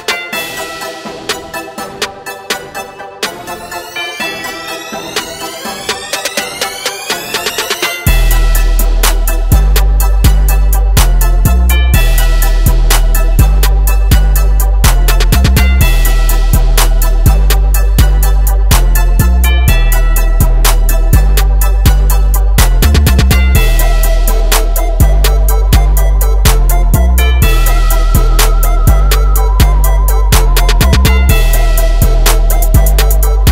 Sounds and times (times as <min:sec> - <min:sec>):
Music: 0:00.0 - 0:33.5.